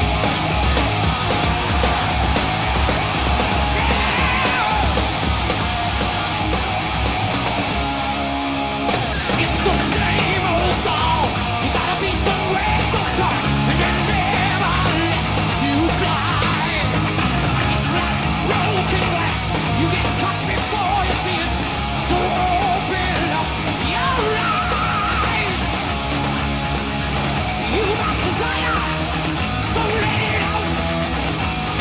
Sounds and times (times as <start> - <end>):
Music: 0.0 - 31.8.